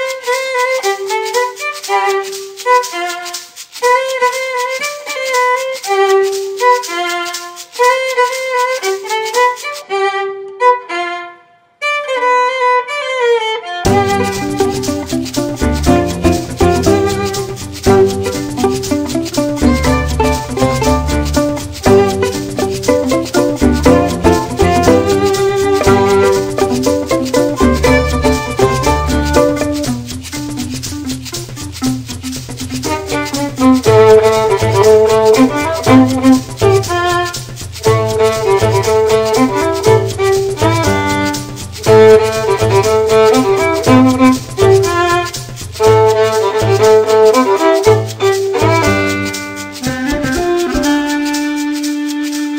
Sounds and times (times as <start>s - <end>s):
Violin, fiddle: 0.0s - 52.5s.